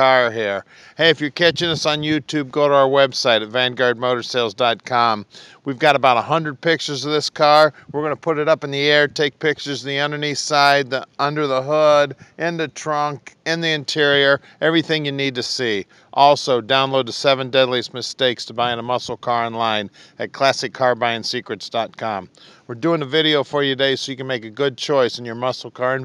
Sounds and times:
Speech: 0:00.0 - 0:26.0.

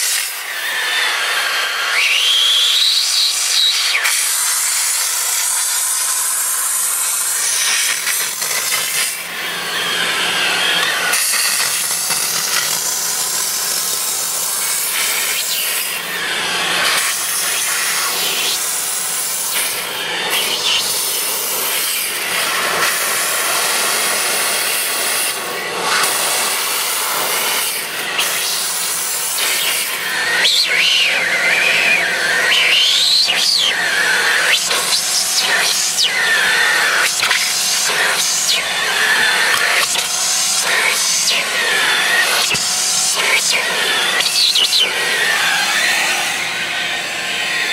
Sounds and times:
Steam: 0:00.0 - 0:09.5, 0:10.8 - 0:16.2, 0:16.8 - 0:46.2.

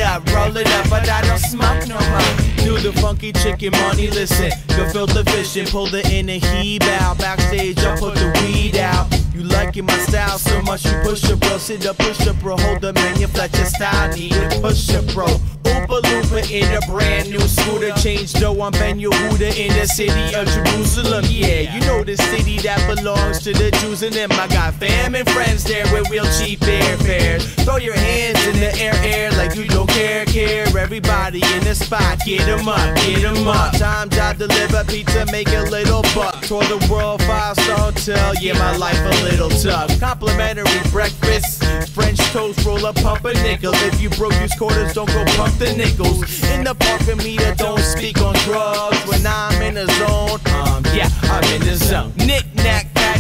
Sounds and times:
Music: 0:00.0 - 0:53.2.

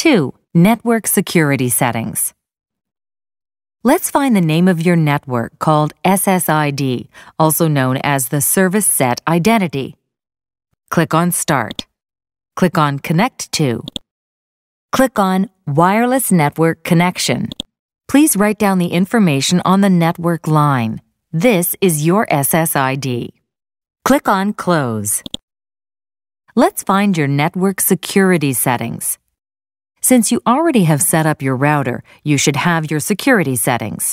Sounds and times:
Speech: 0:00.0 - 0:02.4, 0:03.8 - 0:10.0, 0:10.9 - 0:11.9, 0:12.6 - 0:14.0, 0:15.0 - 0:23.4, 0:24.1 - 0:25.3, 0:26.5 - 0:29.2, 0:30.0 - 0:34.1.

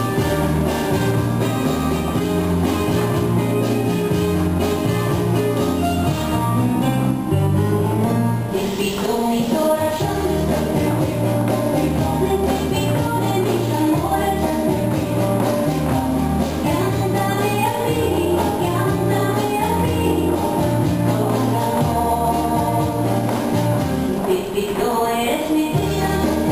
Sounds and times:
Music: 0:00.0 - 0:26.5.

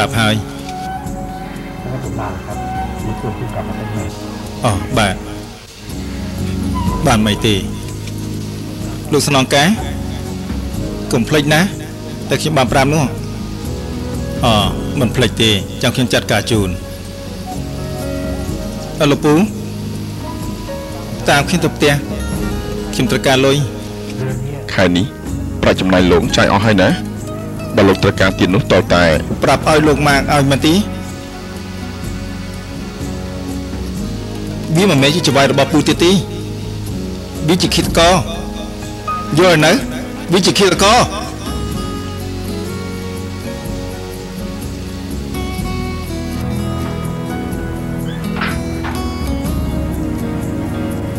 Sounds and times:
Music: 0:00.0 - 0:51.1
Speech: 0:09.1 - 0:09.8, 0:11.1 - 0:13.2, 0:19.0 - 0:19.5, 0:22.9 - 0:27.0, 0:27.8 - 0:30.9, 0:34.7 - 0:36.3, 0:37.4 - 0:38.3, 0:39.3 - 0:41.3.

